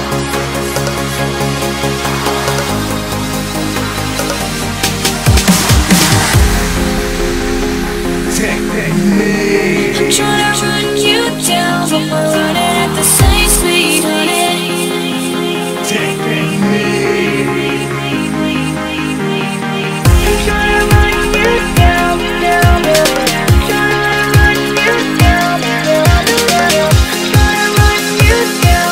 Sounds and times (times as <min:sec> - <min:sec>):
Dubstep: 0:00.0 - 0:28.9.